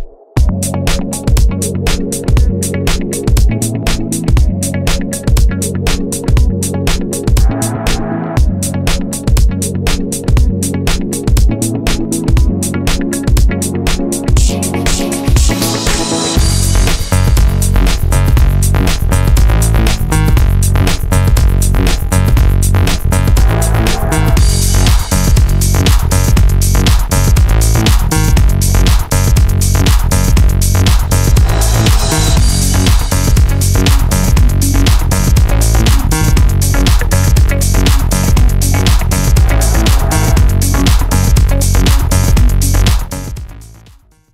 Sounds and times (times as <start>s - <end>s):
Techno: 0.0s - 44.0s
Electronica: 0.0s - 44.2s
Trance music: 0.0s - 44.2s.